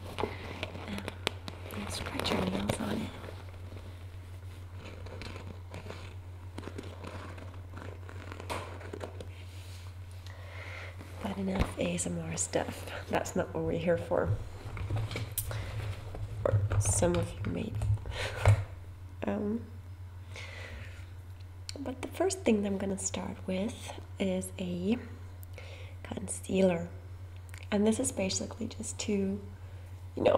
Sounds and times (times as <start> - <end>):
Crackle: 0.0 - 9.4.